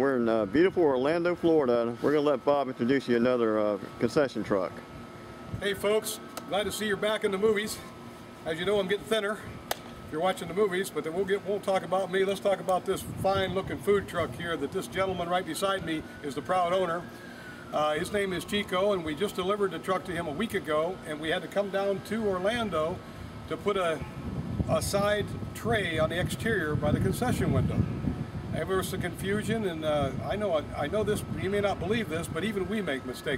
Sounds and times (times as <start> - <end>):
Speech: 0.0 - 4.8, 5.6 - 9.4, 10.1 - 17.0, 17.8 - 24.0, 24.7 - 27.8, 28.5 - 33.3.